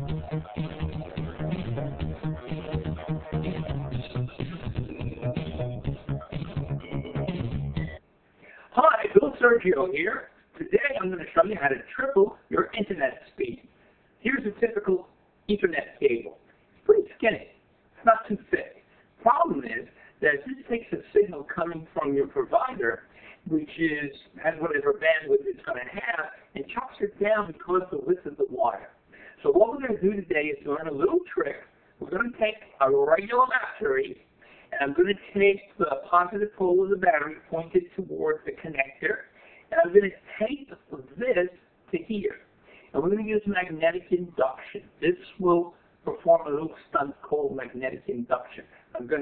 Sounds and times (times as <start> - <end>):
Inside, small room: 0.0 - 49.2
Speech: 8.6 - 49.2.